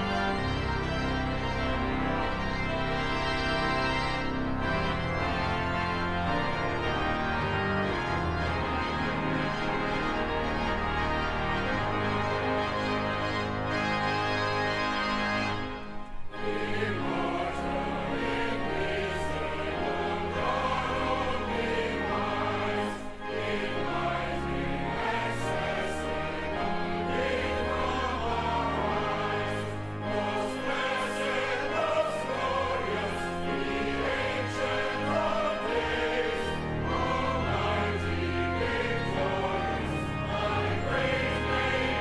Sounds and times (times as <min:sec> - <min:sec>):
Choir: 0:00.0 - 0:03.0, 0:16.4 - 0:42.0.